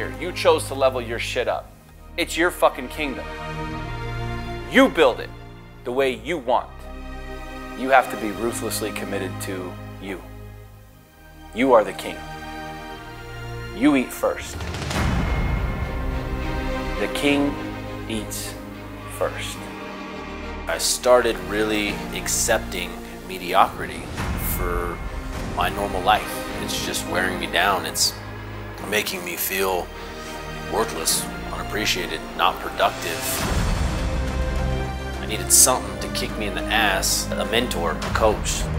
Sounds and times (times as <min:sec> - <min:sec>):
Speech: 0:00.0 - 0:03.3, 0:04.7 - 0:06.8, 0:07.8 - 0:10.3, 0:11.5 - 0:12.2, 0:13.7 - 0:14.6, 0:17.0 - 0:19.7, 0:20.7 - 0:25.0, 0:25.6 - 0:28.2, 0:28.8 - 0:29.9, 0:30.7 - 0:33.4, 0:35.2 - 0:38.7
Music: 0:00.0 - 0:38.7.